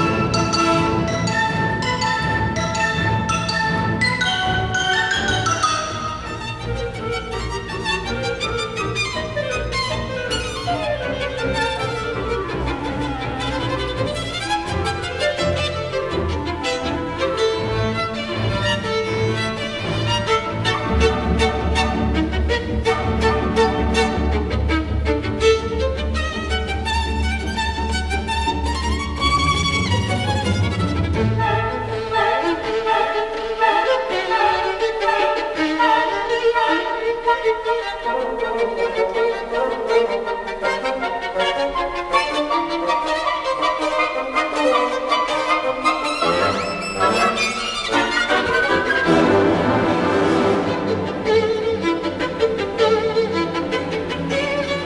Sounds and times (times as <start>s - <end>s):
Violin, fiddle: 0.0s - 54.8s.